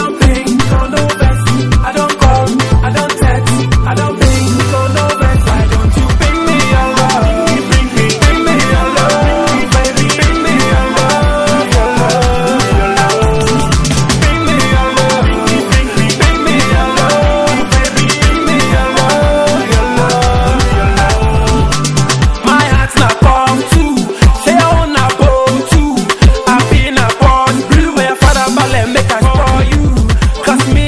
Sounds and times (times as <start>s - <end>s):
Music: 0.0s - 30.8s.